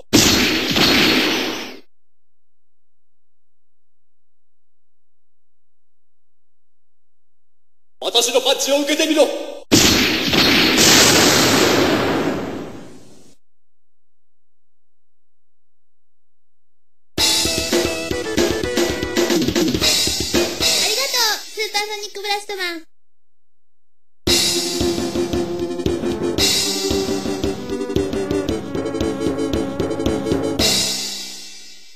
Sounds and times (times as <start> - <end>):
Speech: 8.0 - 9.6, 20.8 - 22.9.